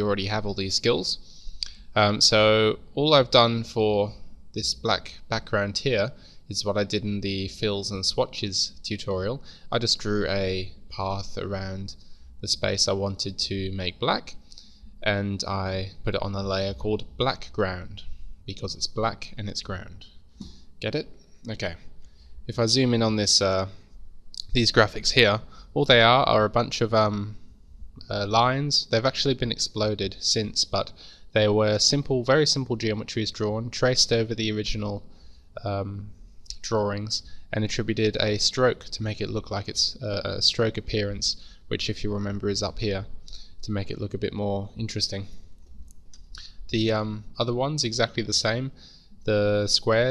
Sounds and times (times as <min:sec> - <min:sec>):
Speech: 0:00.0 - 0:14.4, 0:15.0 - 0:20.2, 0:20.8 - 0:21.9, 0:22.5 - 0:45.4, 0:46.4 - 0:50.1.